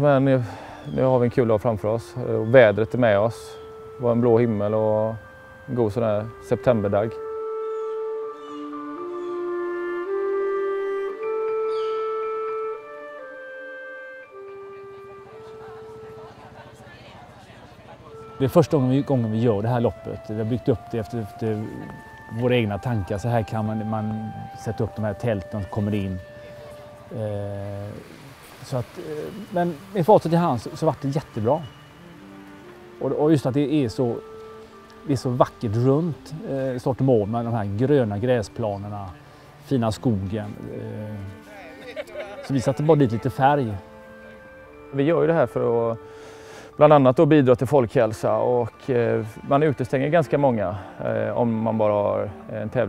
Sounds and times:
Speech: 0.0s - 7.2s, 14.8s - 26.2s, 27.1s - 28.0s, 28.6s - 31.7s, 33.0s - 34.2s, 35.1s - 39.1s, 39.7s - 43.8s, 45.0s - 46.0s, 46.8s - 52.8s
Music: 0.0s - 52.8s
Outside, rural or natural: 0.0s - 52.8s.

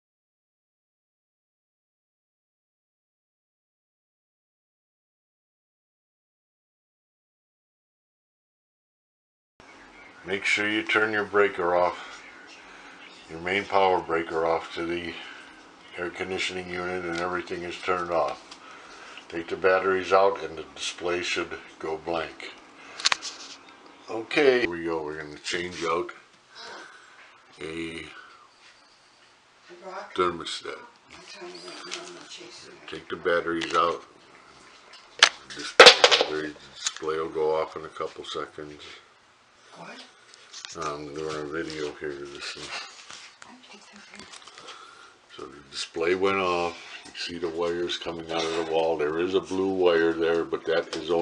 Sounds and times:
Speech: 10.3s - 12.1s, 13.3s - 15.3s, 15.9s - 18.4s, 19.3s - 22.6s, 24.1s - 26.8s, 29.7s - 34.1s, 35.5s - 39.0s, 40.7s - 42.9s, 45.3s - 51.2s.

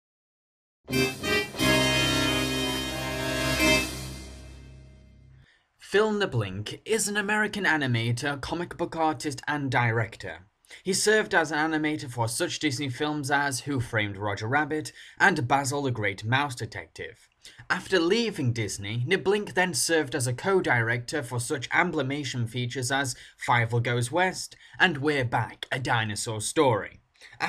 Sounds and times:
Music: 0.9s - 5.4s
Speech: 5.8s - 27.4s.

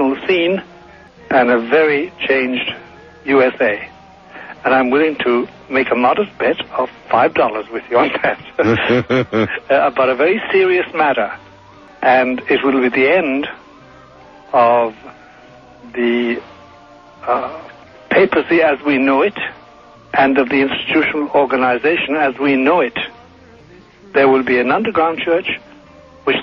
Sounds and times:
Speech: 0.0s - 0.6s, 1.3s - 3.9s, 4.6s - 11.4s, 12.0s - 13.6s, 14.6s - 15.1s, 15.9s - 16.4s, 17.3s - 19.6s, 20.2s - 23.2s, 24.1s - 25.6s.

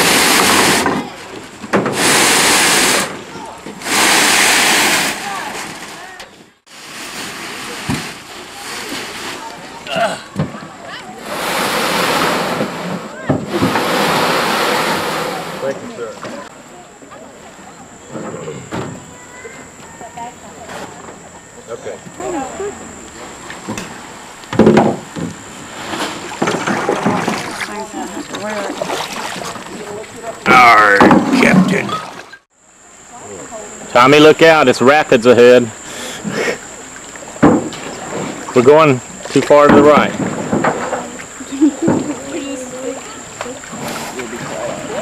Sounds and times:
Boat, Water vehicle: 0.0s - 32.5s, 35.3s - 45.0s.

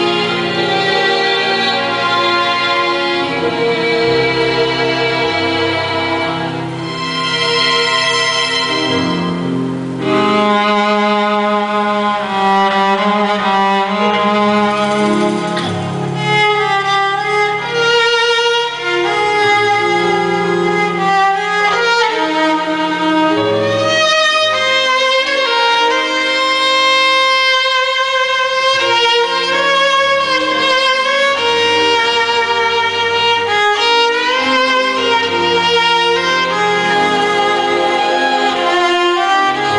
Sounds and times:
Violin, fiddle: 0.0s - 39.7s.

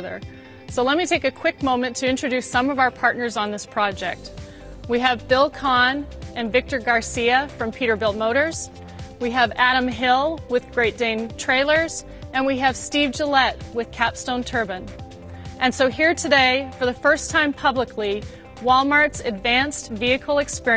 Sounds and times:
Speech: 0.0s - 4.2s, 4.9s - 14.9s, 15.6s - 20.7s
Music: 0.0s - 20.7s.

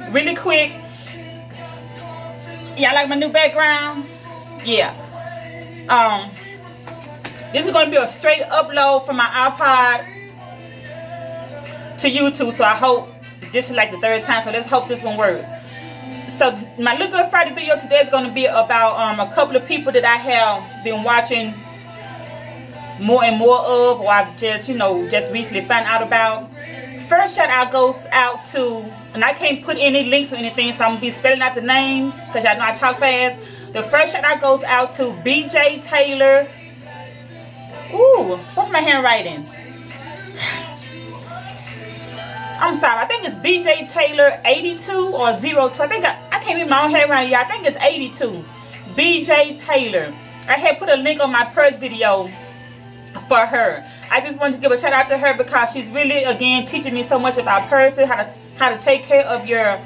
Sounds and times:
Speech: 0.0s - 0.8s, 2.8s - 4.0s, 4.6s - 5.0s, 5.9s - 6.4s, 7.6s - 10.0s, 12.0s - 15.5s, 16.3s - 21.6s, 23.0s - 26.5s, 27.1s - 36.5s, 42.6s - 52.4s, 53.2s - 59.8s
Music: 0.0s - 59.8s.

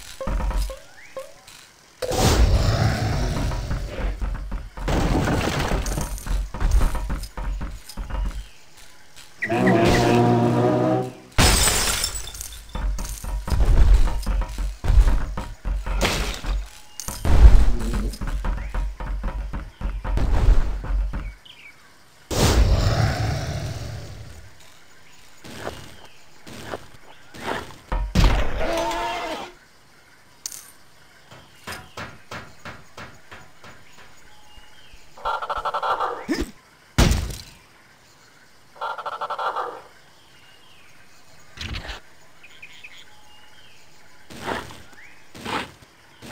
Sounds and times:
Outside, rural or natural: 0.0s - 46.3s.

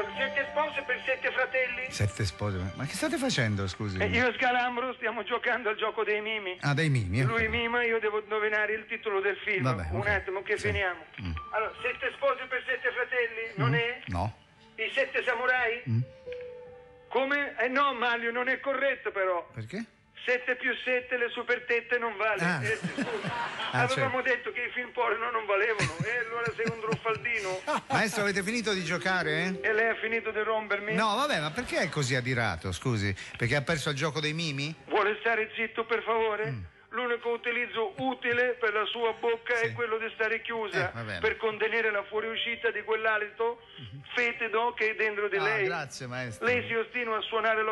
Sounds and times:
Speech: 13.5s - 14.3s, 23.7s - 47.7s.

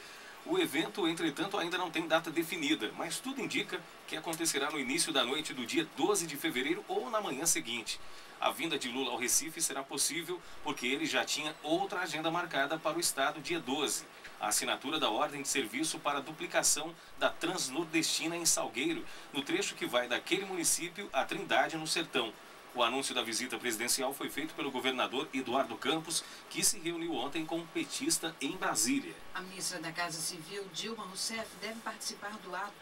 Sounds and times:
Speech: 0.5s - 32.8s.

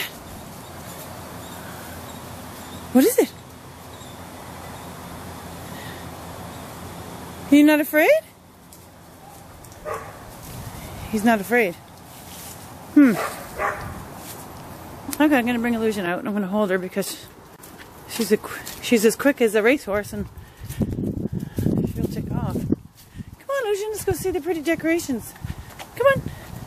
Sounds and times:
Speech: 2.9s - 3.4s, 7.5s - 8.3s, 11.1s - 11.8s, 15.1s - 17.3s, 18.1s - 20.3s, 21.8s - 22.6s, 23.4s - 25.4s, 26.0s - 26.3s
Canidae, dogs, wolves: 9.2s - 10.3s, 13.1s - 14.0s
Bow-wow: 9.8s - 10.2s, 13.2s - 13.9s.

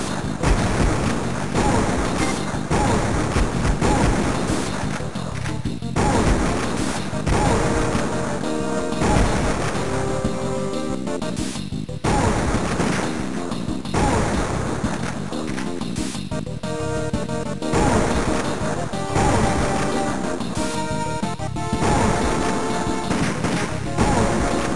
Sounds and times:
Music: 0.0s - 24.7s.

